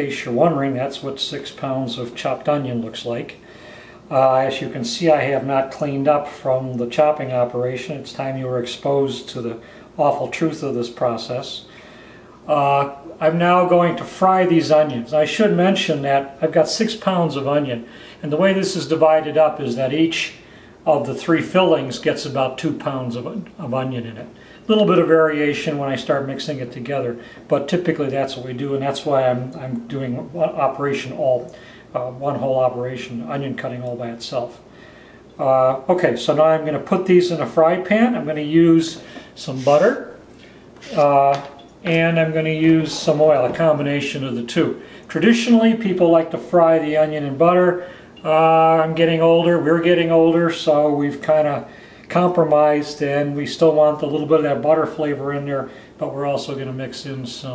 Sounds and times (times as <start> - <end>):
Speech: 0.0 - 3.5, 4.1 - 11.8, 12.5 - 34.7, 35.4 - 40.2, 40.8 - 57.5.